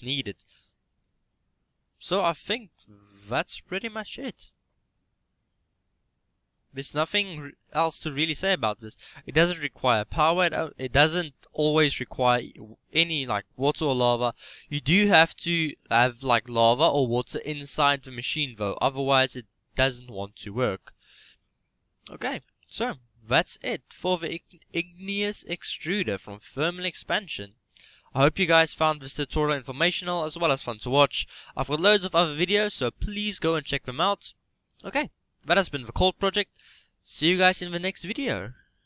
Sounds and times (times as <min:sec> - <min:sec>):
Speech: 0:00.0 - 0:00.5, 0:02.0 - 0:04.6, 0:06.8 - 0:21.0, 0:22.1 - 0:27.6, 0:28.2 - 0:36.5, 0:37.1 - 0:38.6.